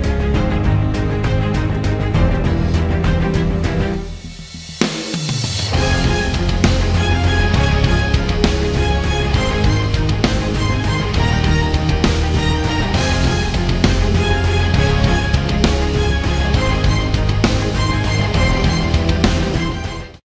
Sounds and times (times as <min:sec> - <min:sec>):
Music: 0:00.0 - 0:20.3.